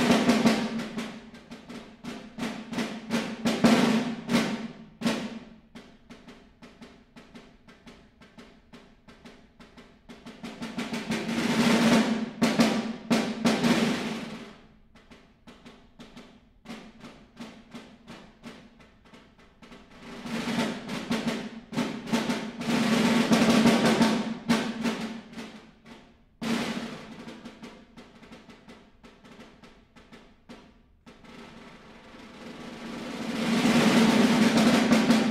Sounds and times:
Drum roll: 0.0 - 35.3.

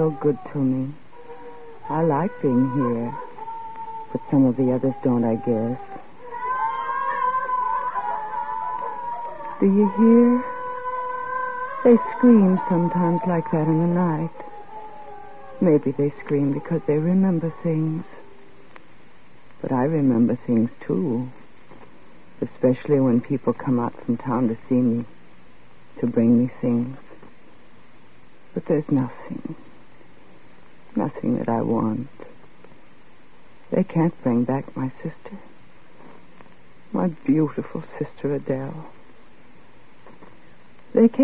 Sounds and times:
Speech: 0.0 - 1.0, 1.9 - 3.3, 4.1 - 5.8, 9.6 - 10.6, 11.9 - 14.4, 15.6 - 18.2, 19.6 - 21.4, 22.4 - 25.1, 26.0 - 27.2, 28.6 - 29.6, 31.0 - 32.3, 33.7 - 35.5, 36.9 - 39.0, 40.9 - 41.2.

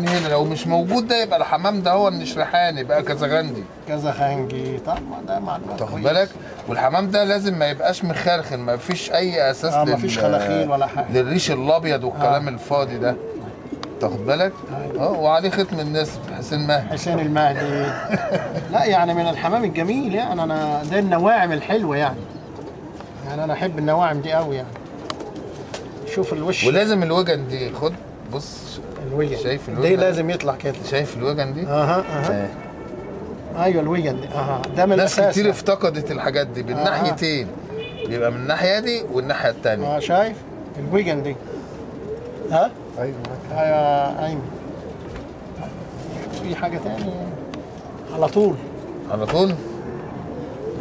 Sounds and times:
Pigeon, dove: 0.0 - 50.8.

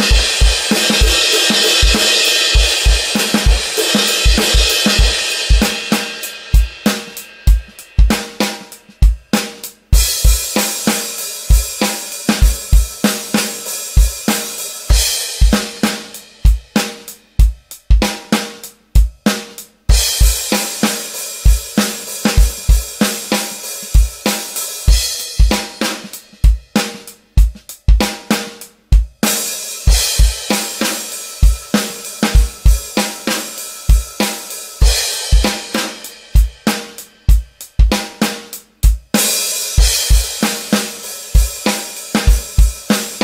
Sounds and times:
Drum: 0.0 - 43.2
Drum kit: 0.0 - 43.2.

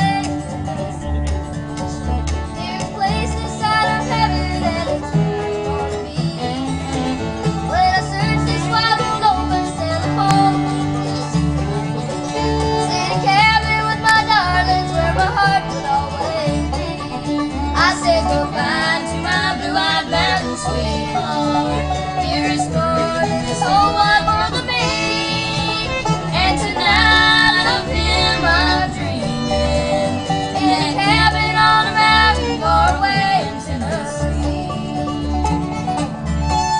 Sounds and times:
Banjo: 0.0 - 36.7
Guitar: 0.0 - 36.7.

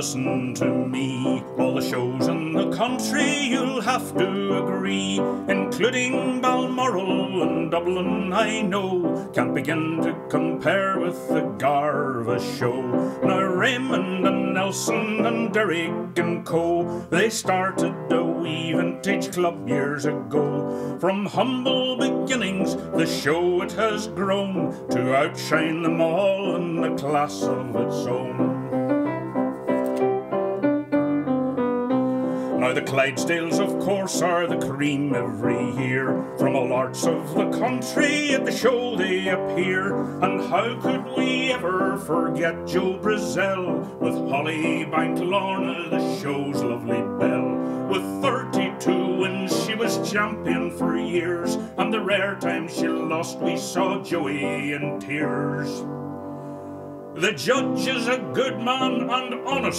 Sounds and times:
Male singing: 0.0 - 28.7, 32.6 - 55.9, 57.2 - 59.7
Music: 0.0 - 59.7.

